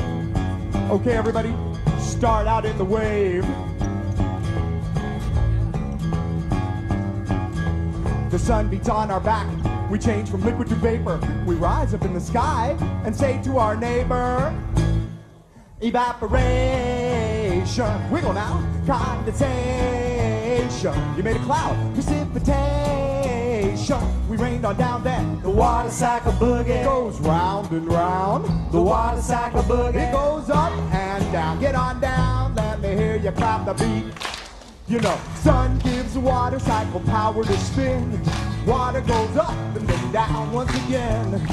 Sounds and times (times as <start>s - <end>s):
Music: 0.0s - 41.5s.